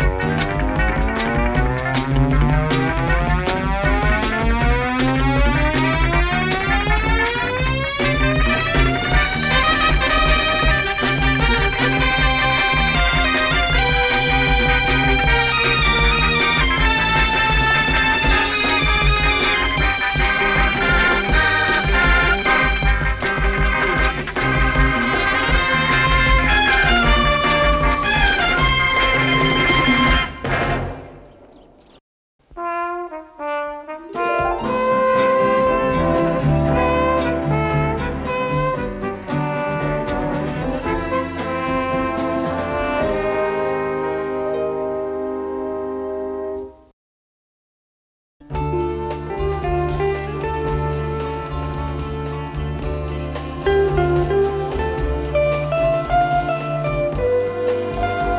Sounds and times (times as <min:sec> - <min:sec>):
Theme music: 0:00.0 - 0:31.4, 0:32.6 - 0:46.8, 0:48.6 - 0:58.3.